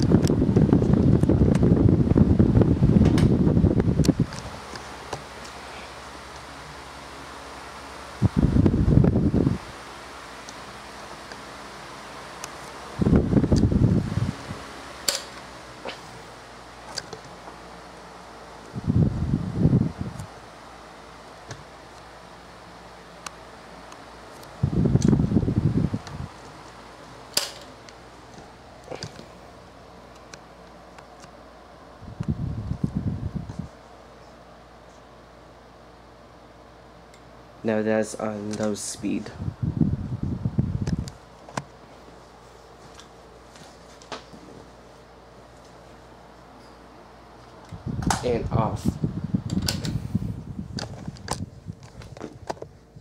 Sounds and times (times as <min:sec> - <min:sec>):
Mechanical fan: 0:00.0 - 0:53.0.